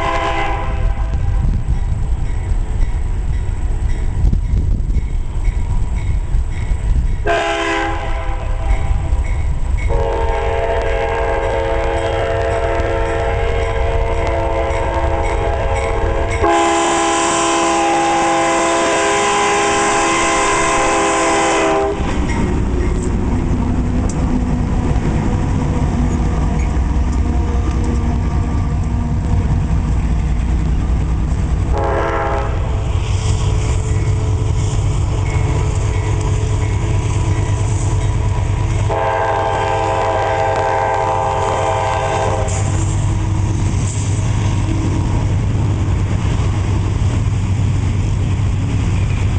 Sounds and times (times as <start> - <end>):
Outside, urban or manmade: 0.0 - 49.3
Railroad car, train wagon: 0.0 - 49.3
Train: 0.0 - 49.3.